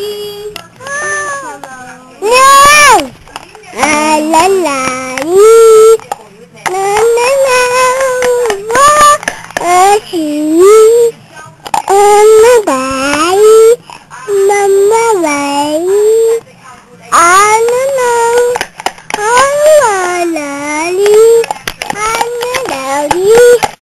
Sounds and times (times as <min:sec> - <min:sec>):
Speech: 0:00.0 - 0:23.8
Child singing: 0:03.8 - 0:06.0, 0:06.7 - 0:11.2, 0:11.9 - 0:16.4, 0:17.2 - 0:18.6, 0:19.2 - 0:23.8.